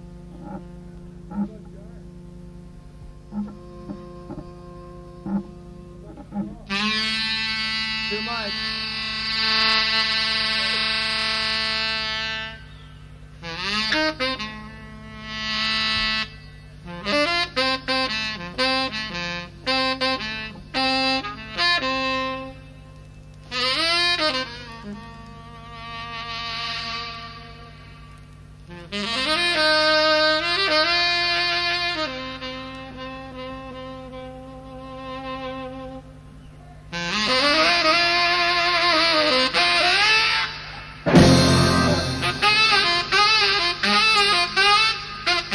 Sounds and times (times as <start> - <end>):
Music: 0.0 - 36.2, 37.0 - 45.5.